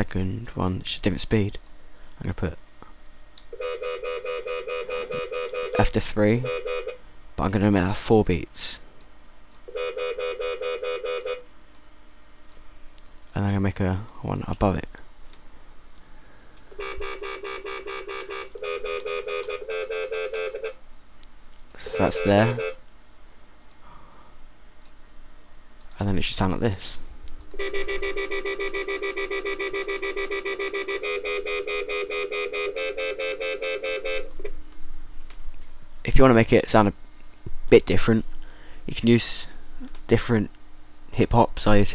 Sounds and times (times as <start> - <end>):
Speech: 0.0 - 1.6, 2.2 - 2.6, 5.8 - 6.5, 7.4 - 8.8, 13.3 - 15.0, 21.8 - 22.6, 26.0 - 27.1, 36.1 - 37.0, 37.7 - 38.3, 38.9 - 40.5, 41.1 - 41.9.